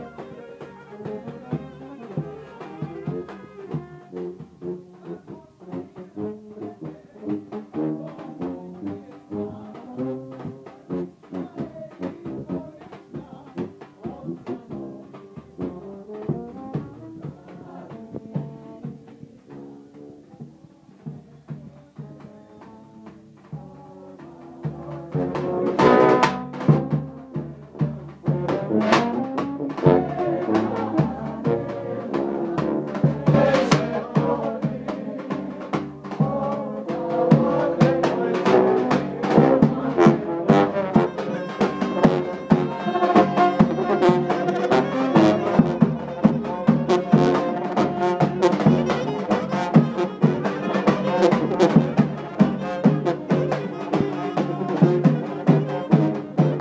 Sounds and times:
Brass instrument: 0:00.0 - 0:56.6.

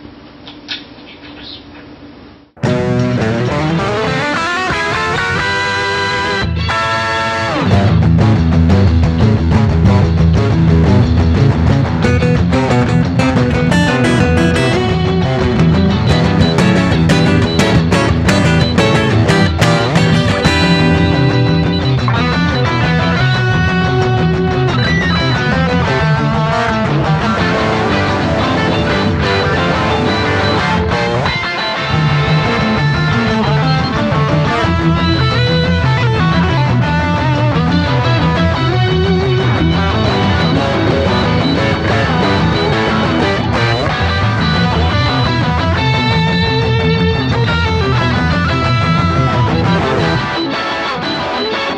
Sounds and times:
Strum: 0:02.6 - 0:50.4
Electric guitar: 0:02.6 - 0:51.7.

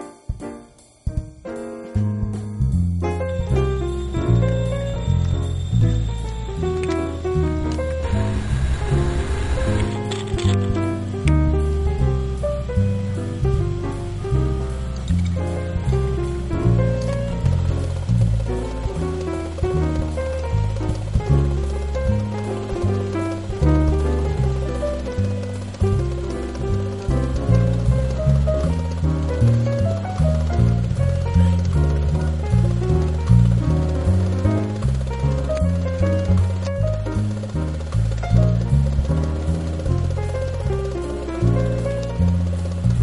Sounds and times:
Music: 0:00.0 - 0:43.0.

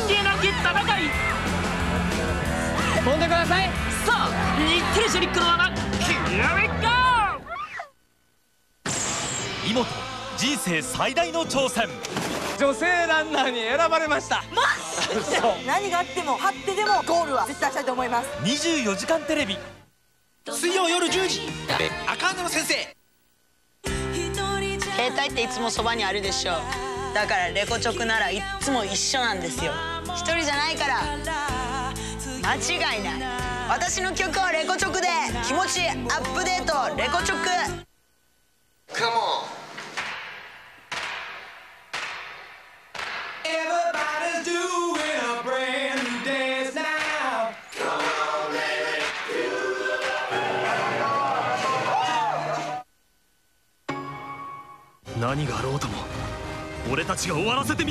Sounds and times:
Music: 0:00.0 - 0:07.4, 0:09.0 - 0:19.8, 0:20.6 - 0:23.0, 0:23.8 - 0:37.9, 0:43.0 - 0:52.8, 0:53.9 - 0:57.9.

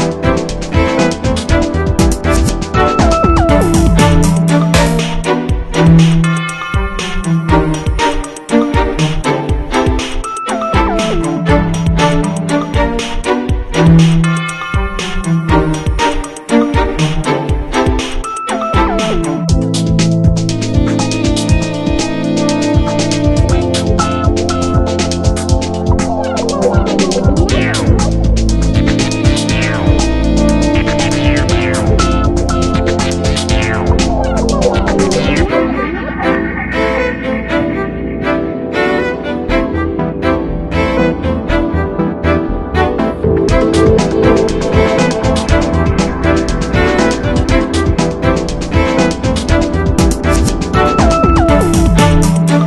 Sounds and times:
Music: 0:00.0 - 0:52.6.

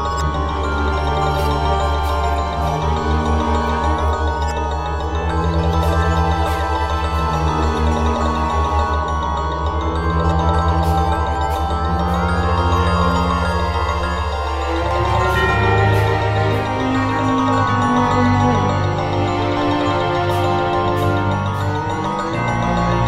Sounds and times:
Theme music: 0:00.0 - 0:23.0.

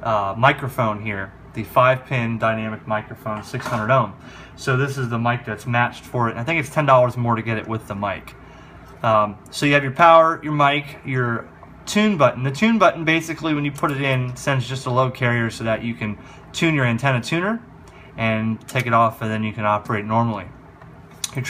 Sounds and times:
Speech: 0:00.0 - 0:08.4, 0:09.0 - 0:20.6, 0:21.3 - 0:21.4.

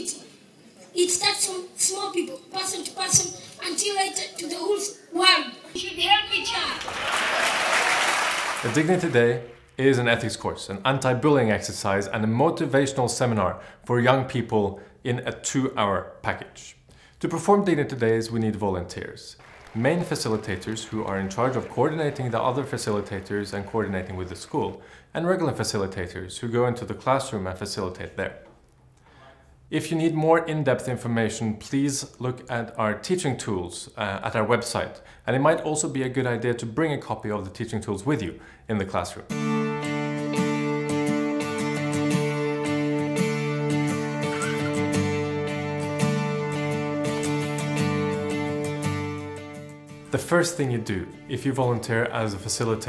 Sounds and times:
Speech: 0:00.0 - 0:06.8, 0:08.6 - 0:28.5, 0:29.2 - 0:39.3, 0:50.1 - 0:52.8.

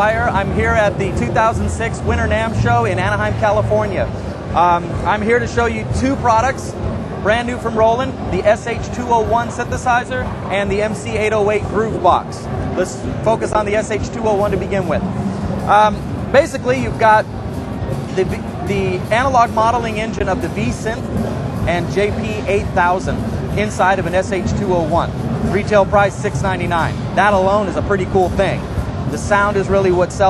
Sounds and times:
Speech: 0:00.0 - 0:15.1, 0:15.7 - 0:17.3, 0:18.0 - 0:30.3
Music: 0:00.0 - 0:30.3.

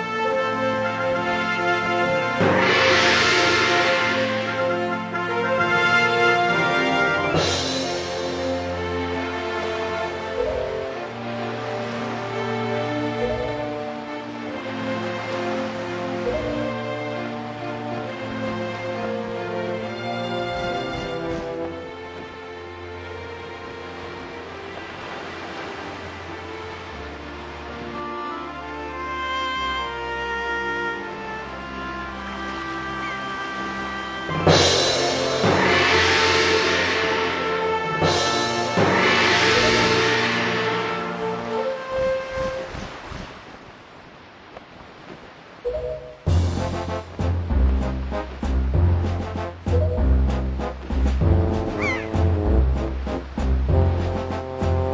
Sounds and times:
Music: 0:00.0 - 0:43.0, 0:45.7 - 0:54.9
Rustling leaves: 0:00.0 - 0:54.9.

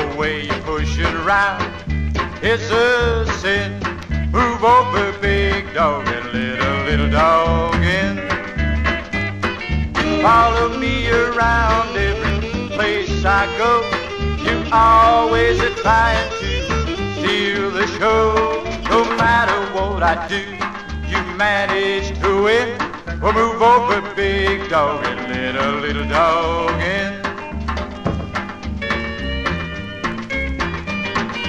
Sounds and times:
Music: 0:00.0 - 0:31.4.

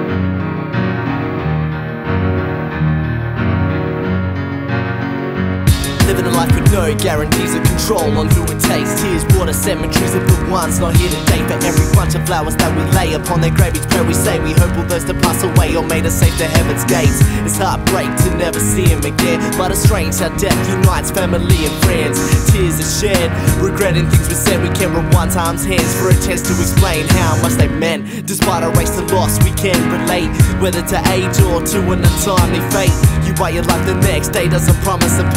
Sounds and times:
Music: 0:00.0 - 0:35.3.

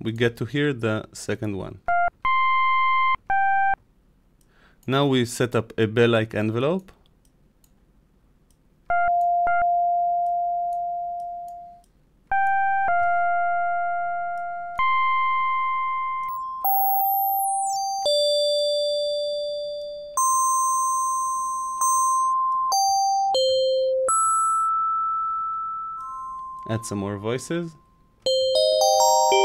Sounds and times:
Speech: 0:00.0 - 0:01.8, 0:04.9 - 0:07.0, 0:26.7 - 0:27.8
Synthesizer: 0:12.3 - 0:19.1, 0:28.3 - 0:29.4.

